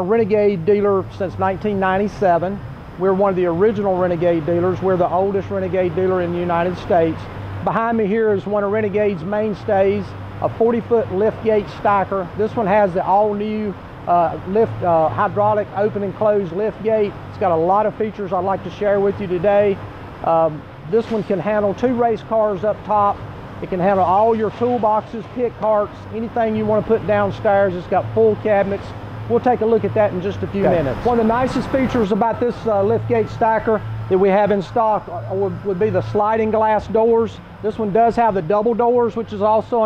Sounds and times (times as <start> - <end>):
Speech: 0.0 - 39.8.